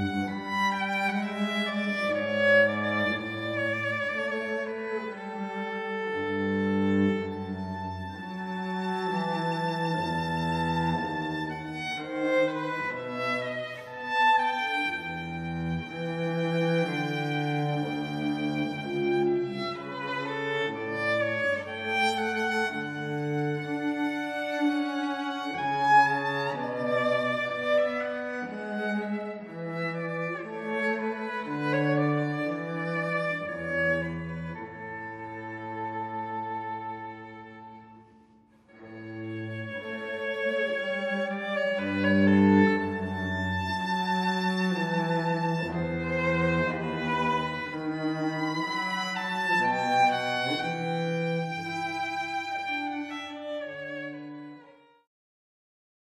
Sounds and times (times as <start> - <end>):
Cello: 0.0 - 55.1.